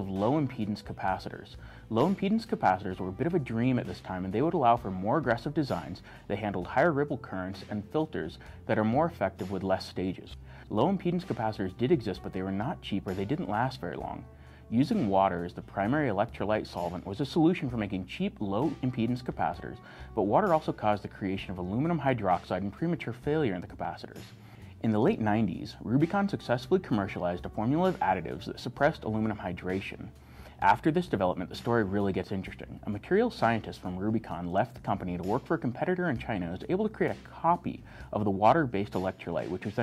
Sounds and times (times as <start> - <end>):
Speech: 0.0 - 24.2, 24.8 - 39.8.